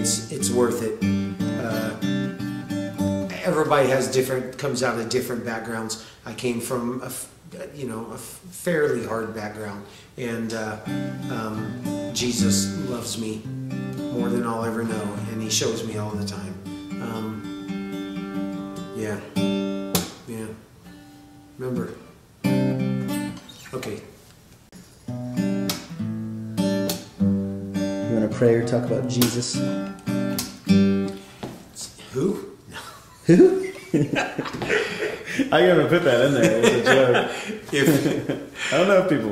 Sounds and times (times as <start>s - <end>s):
Speech: 0.0s - 1.0s, 1.6s - 2.0s, 3.3s - 13.4s, 14.1s - 17.4s, 20.3s - 20.6s, 21.6s - 22.1s, 23.7s - 24.2s, 28.0s - 29.7s, 31.8s - 32.6s, 35.5s - 39.3s
Acoustic guitar: 0.0s - 39.3s
Inside, small room: 0.0s - 39.3s.